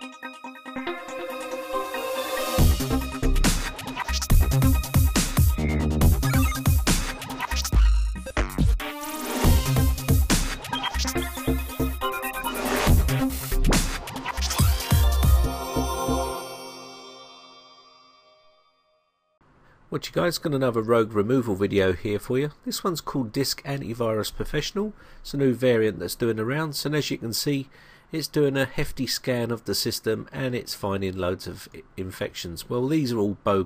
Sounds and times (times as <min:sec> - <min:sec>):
Music: 0:00.0 - 0:19.4.